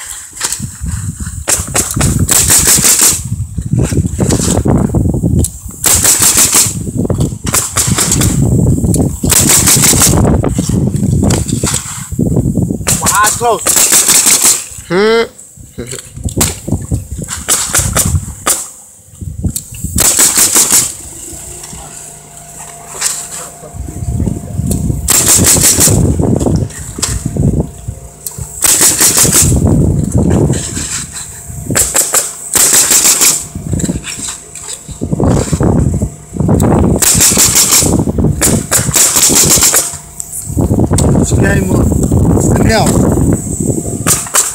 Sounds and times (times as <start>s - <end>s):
Outside, urban or manmade: 0.0s - 44.5s.